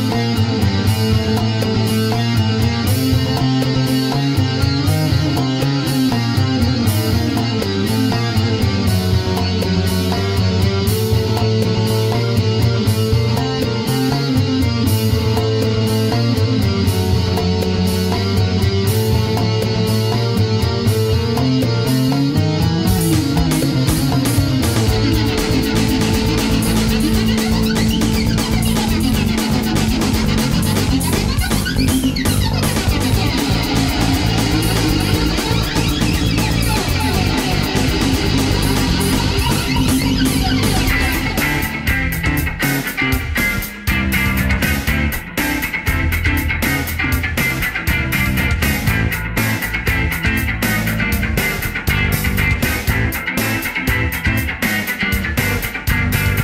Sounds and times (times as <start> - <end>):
Bass guitar: 0.0 - 56.4.